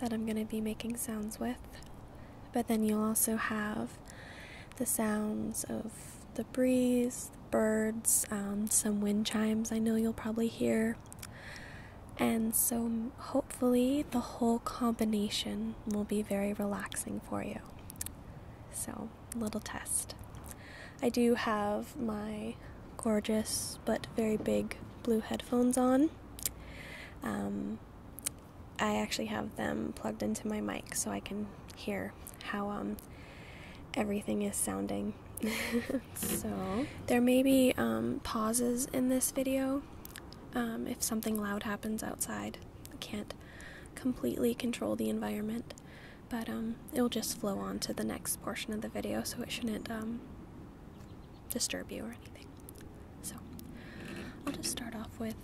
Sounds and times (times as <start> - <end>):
Speech: 0.0 - 1.8, 2.6 - 4.0, 4.8 - 11.0, 12.2 - 17.7, 18.8 - 20.2, 21.0 - 26.2, 27.2 - 33.0, 34.0 - 39.9, 40.5 - 43.4, 44.0 - 50.2, 51.5 - 52.5, 54.5 - 55.4.